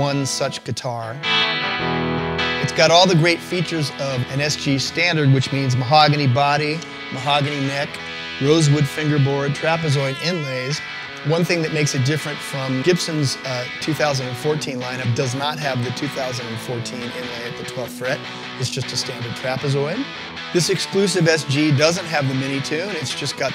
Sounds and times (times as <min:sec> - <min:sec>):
Speech: 0:00.0 - 0:01.2, 0:02.6 - 0:23.5
Music: 0:00.0 - 0:23.5.